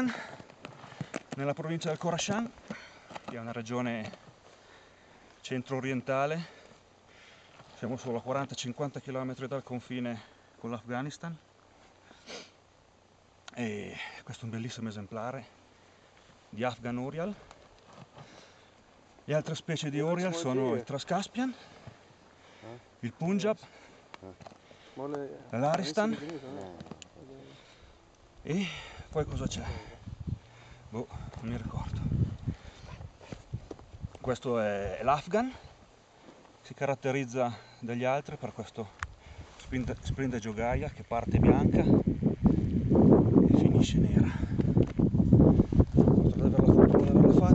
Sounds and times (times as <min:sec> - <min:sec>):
Speech: 0:01.4 - 0:02.6, 0:03.3 - 0:04.2, 0:05.4 - 0:06.6, 0:07.8 - 0:11.4, 0:13.5 - 0:15.5, 0:16.5 - 0:17.5, 0:19.3 - 0:21.6, 0:22.6 - 0:23.6, 0:25.0 - 0:27.6, 0:28.4 - 0:30.0, 0:30.9 - 0:32.1, 0:34.2 - 0:35.7, 0:36.6 - 0:39.0, 0:39.7 - 0:42.0, 0:43.5 - 0:44.5, 0:46.3 - 0:47.5.